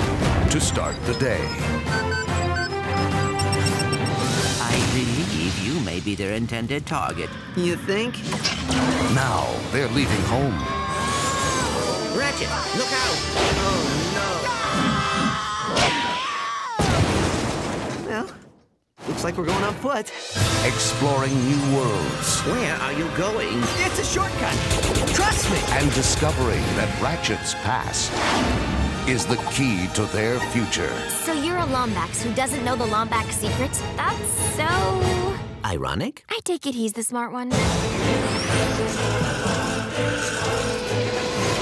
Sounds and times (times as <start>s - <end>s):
Speech: 4.6s - 8.1s, 29.1s - 37.5s.